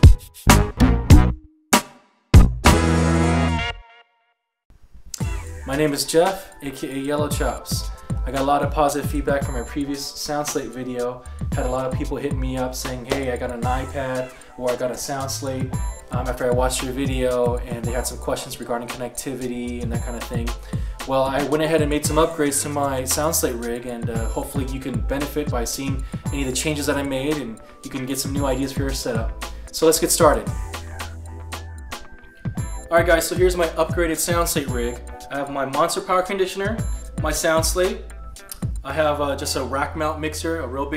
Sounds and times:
Music: 0.0 - 4.5, 5.2 - 40.9
Speech: 5.7 - 30.5, 32.9 - 38.0, 38.8 - 40.9.

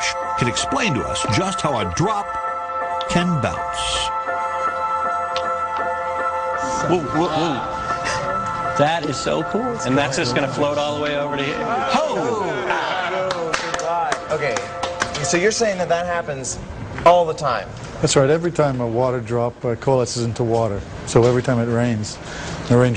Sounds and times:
Music: 0.0 - 16.6.

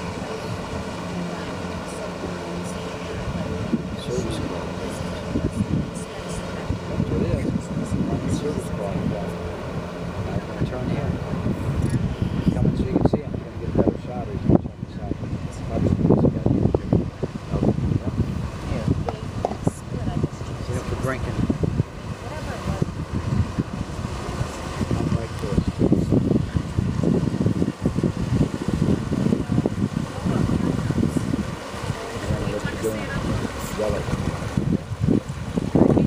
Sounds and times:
Motorboat, speedboat: 0.0 - 36.0.

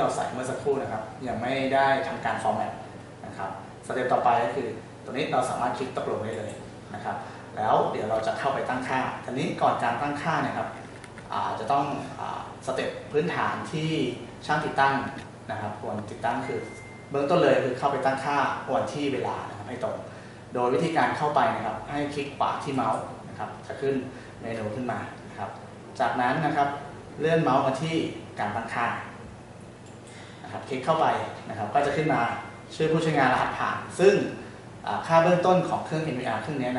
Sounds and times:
Speech: 0.0 - 29.2, 30.5 - 36.7.

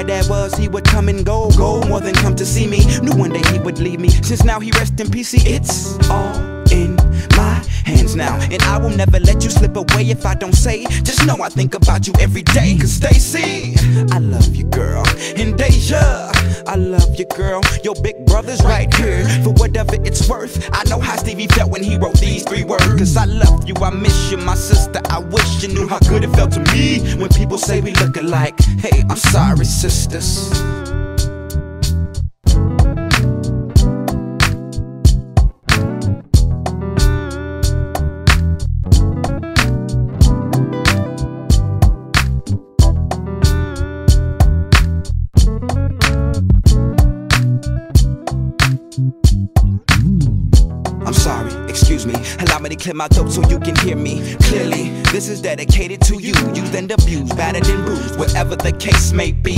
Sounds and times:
Rhythm and blues: 0.0 - 59.5.

